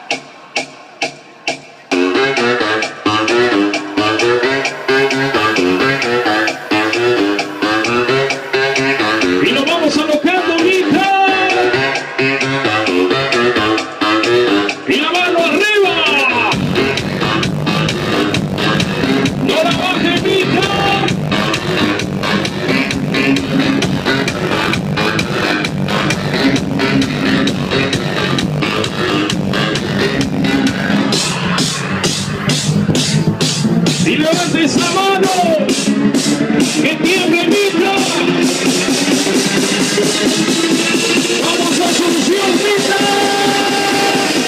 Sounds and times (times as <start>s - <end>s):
Music: 0.0s - 44.4s.